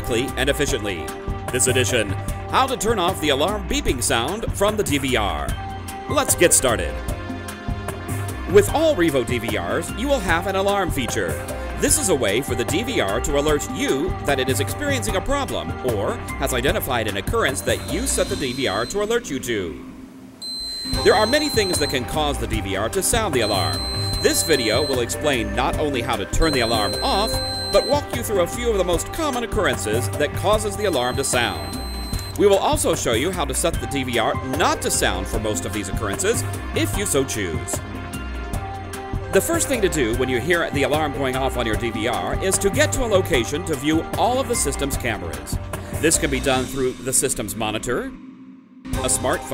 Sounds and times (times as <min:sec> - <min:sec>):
Speech: 0:00.0 - 0:07.0, 0:08.5 - 0:19.8, 0:21.0 - 0:31.8, 0:32.4 - 0:37.8, 0:39.4 - 0:48.2, 0:49.0 - 0:49.5
Music: 0:00.0 - 0:49.5.